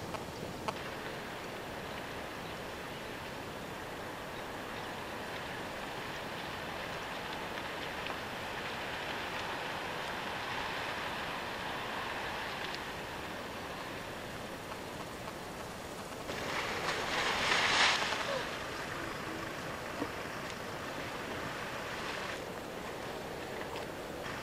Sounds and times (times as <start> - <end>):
Wind: 0.0 - 24.4.